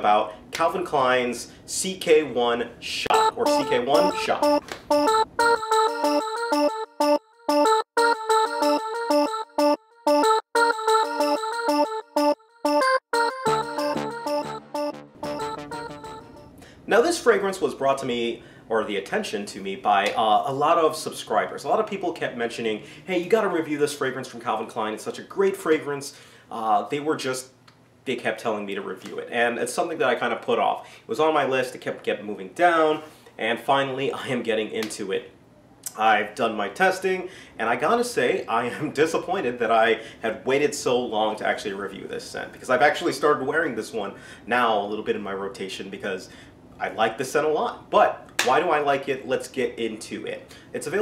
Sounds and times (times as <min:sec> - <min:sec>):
Music: 0:03.1 - 0:16.6.